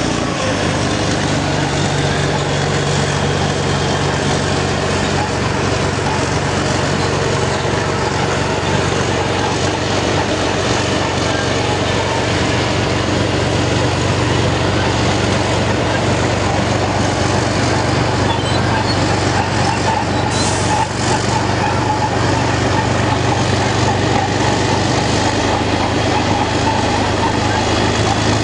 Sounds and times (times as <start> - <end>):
Truck: 0.0 - 28.4.